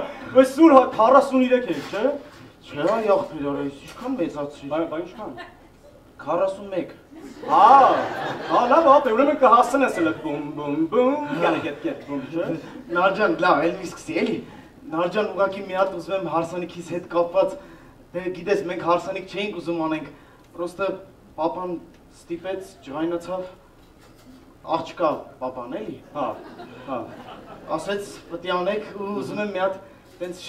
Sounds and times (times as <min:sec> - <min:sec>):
Speech: 0:00.0 - 0:05.4, 0:06.2 - 0:17.6, 0:18.2 - 0:23.6, 0:24.7 - 0:30.4.